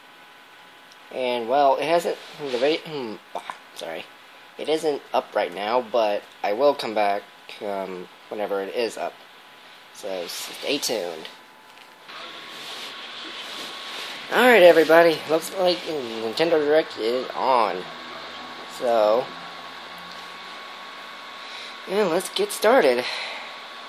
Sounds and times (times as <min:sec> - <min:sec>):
Speech: 0:01.1 - 0:09.2, 0:10.0 - 0:11.4, 0:14.3 - 0:17.9, 0:18.7 - 0:19.3, 0:21.9 - 0:23.1.